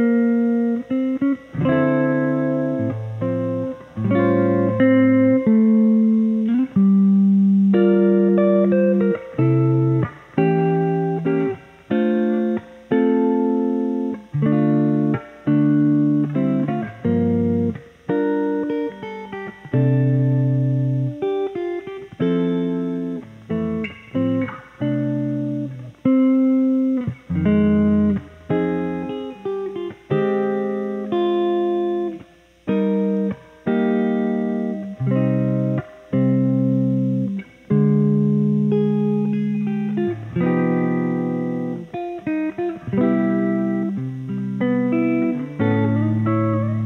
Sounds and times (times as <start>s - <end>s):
Electric guitar: 0.0s - 46.8s
Strum: 0.0s - 46.8s.